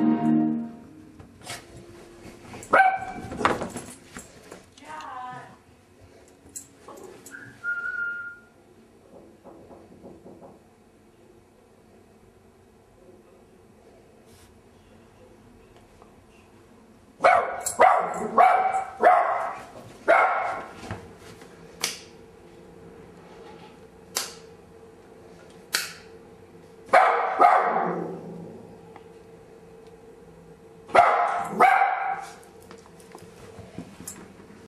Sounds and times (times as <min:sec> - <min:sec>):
Bow-wow: 0:02.7 - 0:03.3, 0:17.2 - 0:20.7, 0:26.9 - 0:28.2, 0:31.0 - 0:32.4
Yip: 0:02.7 - 0:03.3, 0:17.2 - 0:20.6, 0:26.9 - 0:27.9, 0:31.0 - 0:32.4.